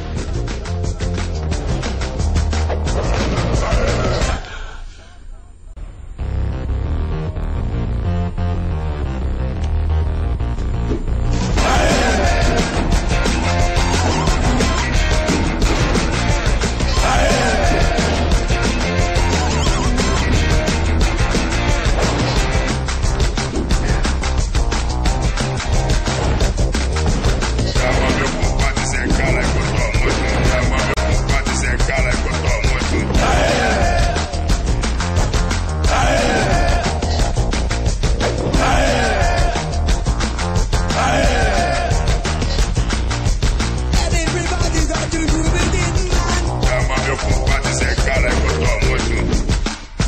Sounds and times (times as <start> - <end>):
Background music: 0.0 - 50.0.